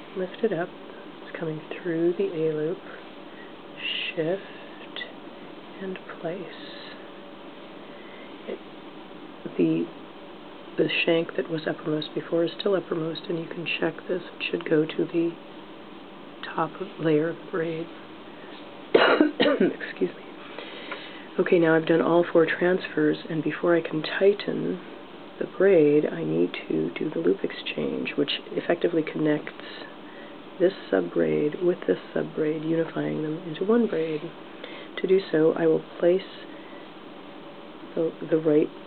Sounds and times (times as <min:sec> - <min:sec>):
Inside, small room: 0:00.0 - 0:38.8
Speech: 0:00.1 - 0:03.0, 0:03.8 - 0:05.1, 0:05.8 - 0:07.0, 0:09.4 - 0:10.0, 0:10.8 - 0:15.4, 0:16.4 - 0:18.0, 0:19.2 - 0:20.2, 0:21.3 - 0:30.0, 0:30.6 - 0:34.4, 0:35.0 - 0:36.5, 0:37.9 - 0:38.8.